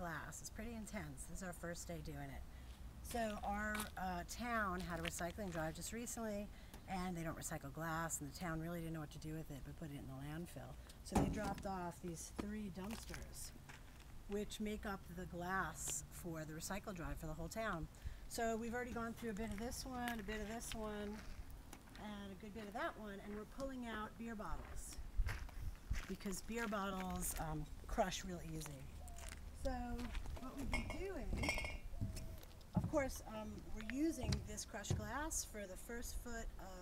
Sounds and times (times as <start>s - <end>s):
Speech: 0.0s - 2.4s, 3.0s - 13.6s, 14.3s - 21.2s, 22.0s - 25.0s, 26.0s - 28.9s, 29.6s - 31.5s, 32.8s - 36.8s.